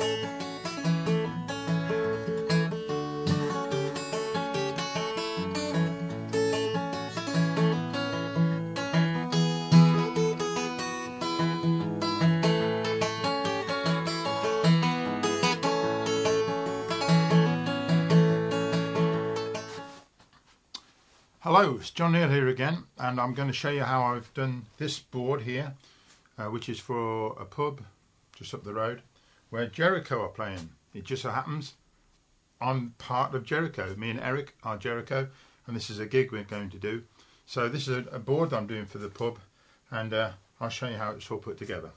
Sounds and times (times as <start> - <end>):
Speech: 21.4 - 25.8, 26.4 - 31.8, 32.6 - 41.9.